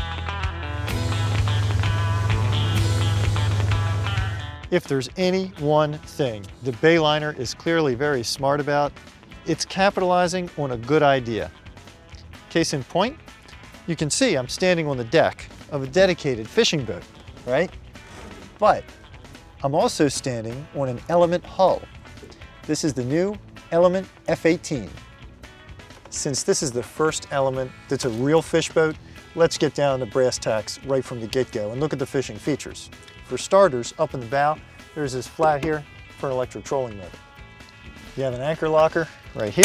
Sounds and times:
Music: 0.0 - 39.6
Speech: 4.7 - 8.9, 9.5 - 11.5, 12.5 - 13.2, 13.9 - 17.7, 18.6 - 18.8, 19.6 - 21.9, 22.7 - 25.0, 26.1 - 37.2, 38.2 - 39.6.

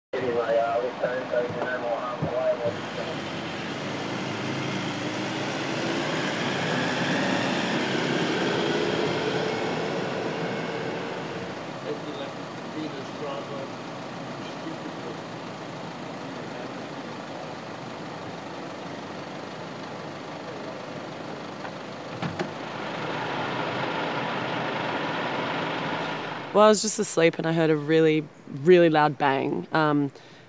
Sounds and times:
Speech: 0.2 - 3.2, 11.8 - 13.7, 14.4 - 15.2, 26.6 - 30.1
Car: 0.2 - 29.4.

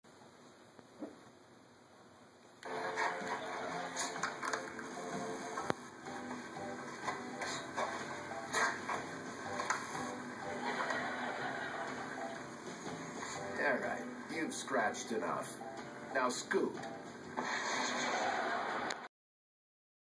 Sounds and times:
Music: 2.6 - 18.9
Speech: 13.6 - 16.8.

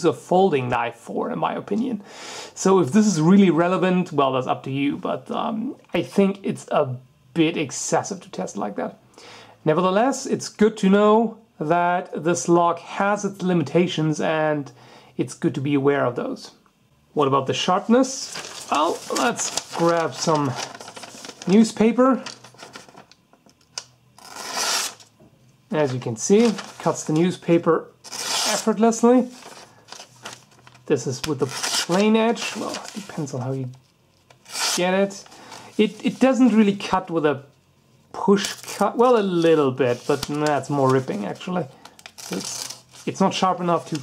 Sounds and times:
Speech: 0.0 - 2.0, 2.6 - 9.0, 9.6 - 20.7, 21.4 - 22.4, 25.7 - 29.4, 30.9 - 33.8, 34.8 - 37.5, 38.1 - 44.0
Inside, small room: 0.0 - 44.0.

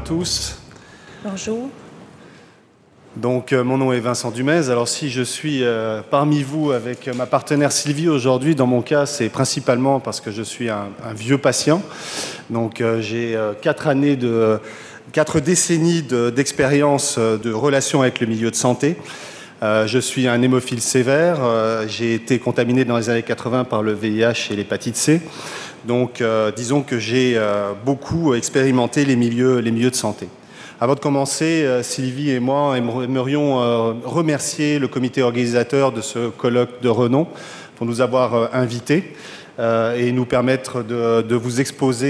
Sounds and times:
Speech: 0.0 - 1.8, 3.2 - 11.9, 12.5 - 19.0, 19.6 - 25.3, 25.9 - 42.1.

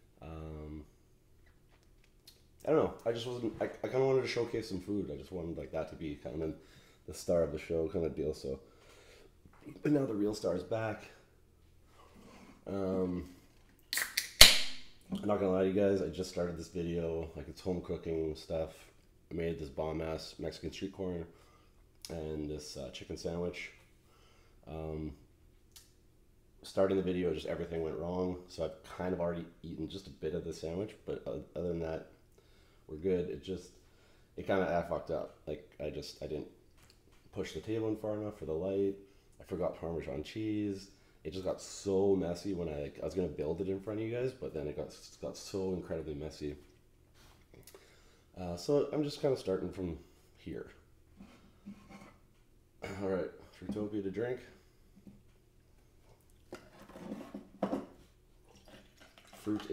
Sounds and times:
Speech: 0.2 - 0.9, 2.6 - 8.6, 9.6 - 11.3, 12.6 - 13.4, 15.1 - 21.4, 22.0 - 23.8, 24.6 - 25.3, 26.6 - 32.2, 32.9 - 33.8, 34.4 - 36.6, 37.3 - 46.7, 48.4 - 50.8, 52.8 - 54.6, 59.4 - 59.7.

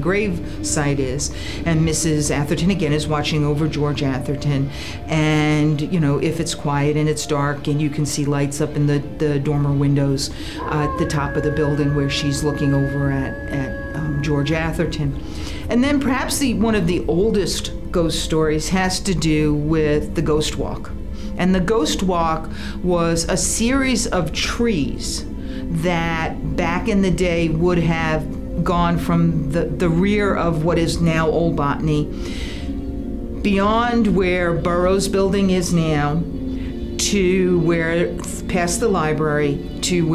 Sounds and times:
Speech: 0.0 - 32.1, 33.4 - 36.2, 37.0 - 40.1.

